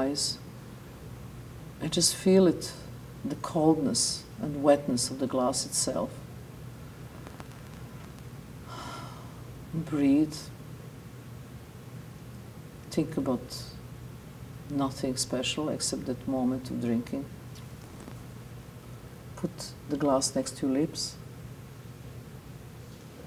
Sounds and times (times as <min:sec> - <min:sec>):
Speech: 0:00.0 - 0:00.4, 0:01.8 - 0:06.2, 0:09.7 - 0:10.6, 0:12.9 - 0:13.8, 0:14.7 - 0:17.3, 0:19.4 - 0:21.2.